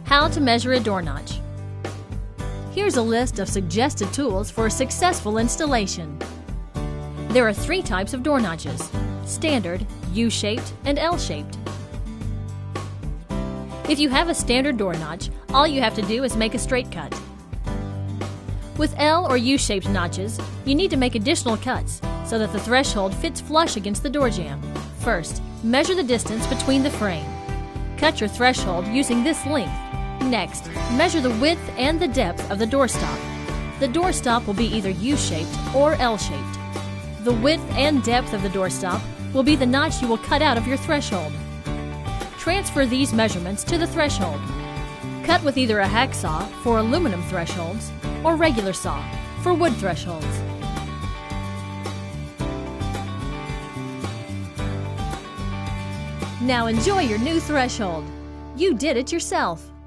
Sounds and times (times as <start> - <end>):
Music: 0.0 - 59.8
Speech: 0.1 - 1.4, 2.8 - 6.2, 7.3 - 11.6, 13.9 - 17.2, 18.8 - 27.3, 28.0 - 33.2, 33.8 - 36.6, 37.2 - 41.4, 42.4 - 44.5, 45.3 - 50.4, 56.4 - 59.7.